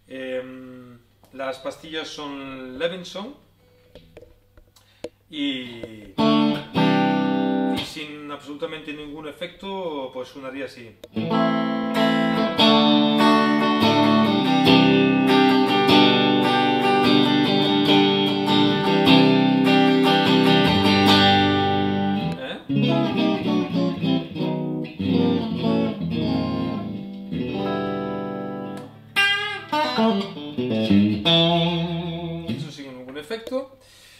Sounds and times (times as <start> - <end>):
Speech: 0.1 - 3.4, 5.3 - 6.2, 7.8 - 11.0, 22.3 - 22.7, 32.5 - 33.8
Strum: 11.2 - 32.8.